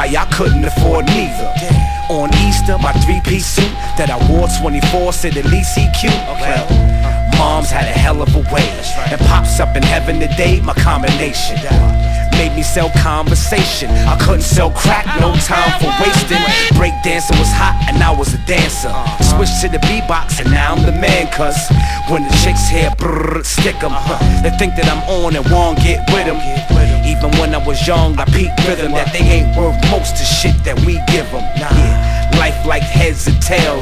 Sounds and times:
Flute: 0.0s - 33.8s.

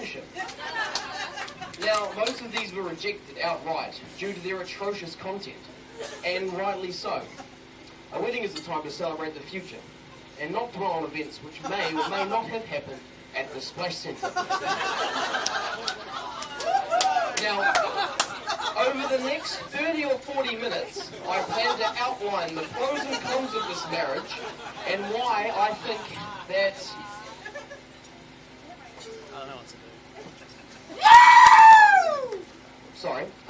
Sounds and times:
Male speech, man speaking: 0.0s - 0.3s, 1.8s - 7.3s, 8.1s - 9.8s, 10.4s - 14.3s, 17.4s - 18.1s, 18.8s - 27.2s, 29.2s - 30.0s, 33.0s - 33.4s.

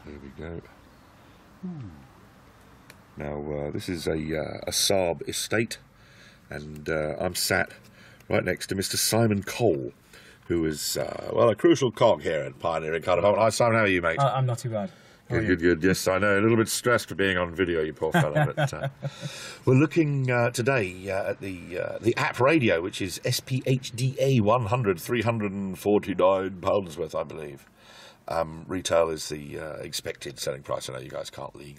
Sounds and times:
Speech: 0.0s - 0.8s, 3.2s - 5.8s, 6.5s - 18.9s, 19.7s - 27.7s, 28.3s - 31.7s.

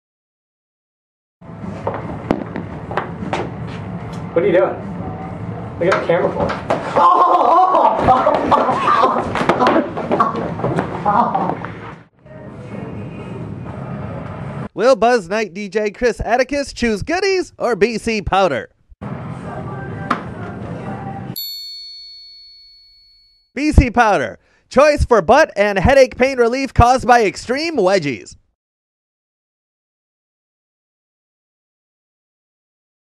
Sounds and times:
Speech: 14.8s - 18.7s, 23.6s - 28.4s.

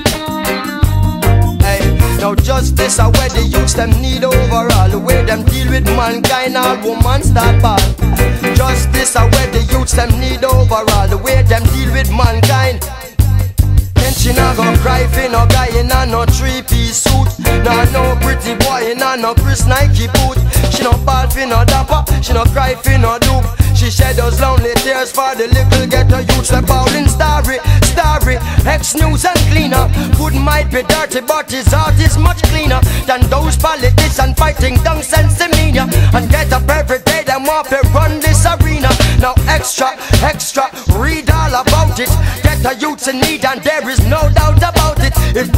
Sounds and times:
Music of Africa: 0.0s - 45.5s.

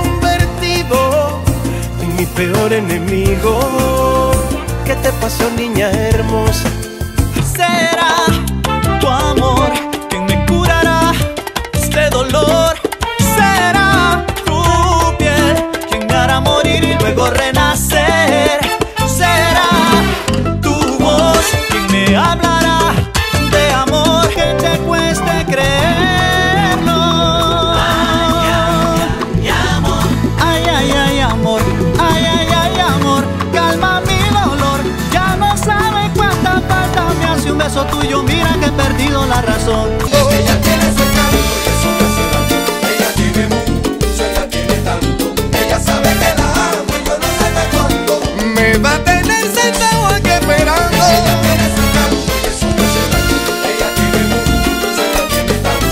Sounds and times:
Soundtrack music: 0.0s - 17.0s, 19.3s - 55.9s.

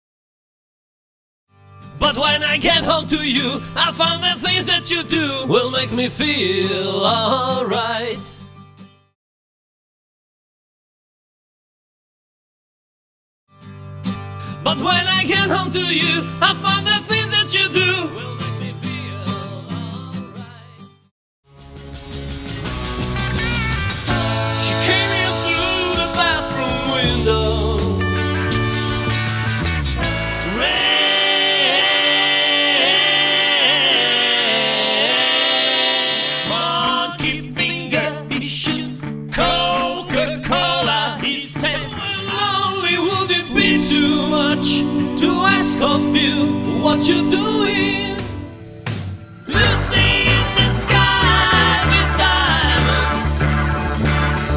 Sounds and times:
Guitar: 1.5s - 9.2s, 13.5s - 54.5s
Vocal music: 1.9s - 8.4s, 14.6s - 20.9s, 22.4s - 29.4s, 30.0s - 54.5s
Singing: 24.2s - 28.2s, 30.0s - 48.5s, 49.5s - 53.3s.

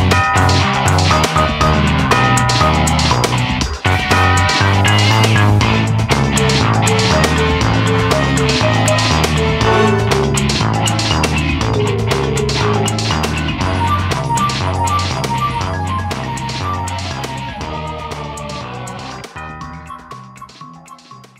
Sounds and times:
Funny music: 0.0s - 21.4s.

